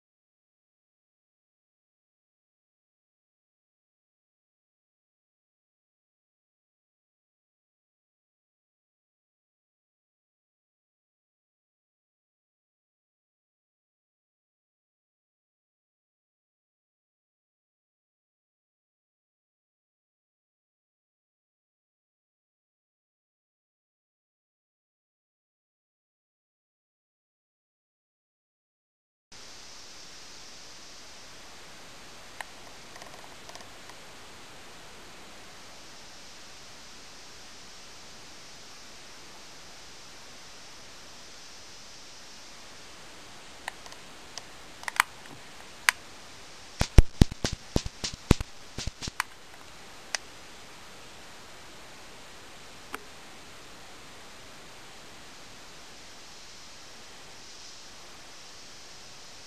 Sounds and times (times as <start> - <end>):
Static: 29.4 - 59.4.